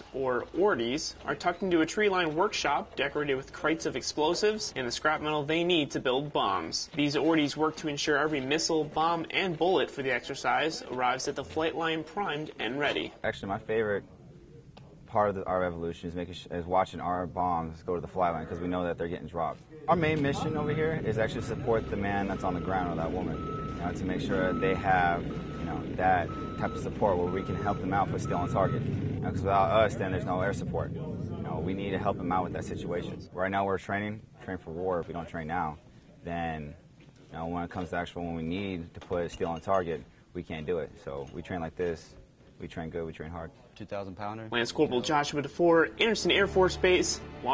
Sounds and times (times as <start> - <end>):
Speech: 0.0 - 14.1, 15.1 - 47.5.